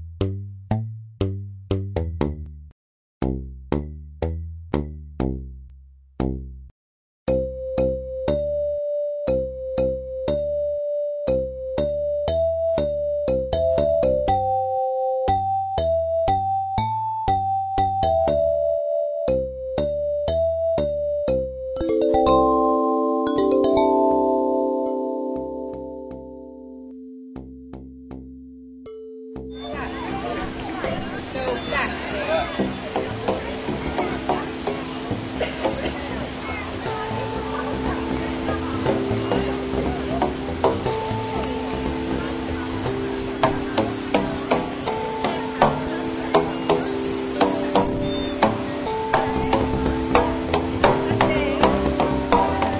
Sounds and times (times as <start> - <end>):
Music: 0.0 - 6.7, 7.3 - 52.7.